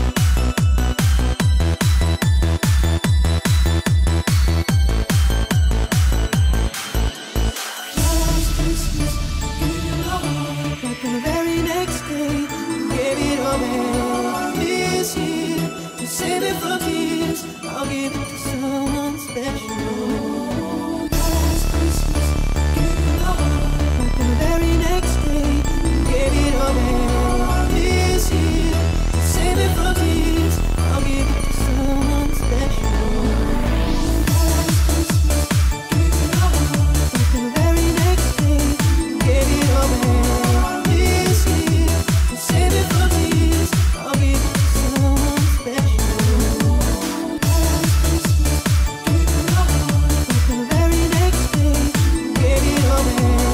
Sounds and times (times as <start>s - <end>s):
Electronic music: 0.0s - 53.5s.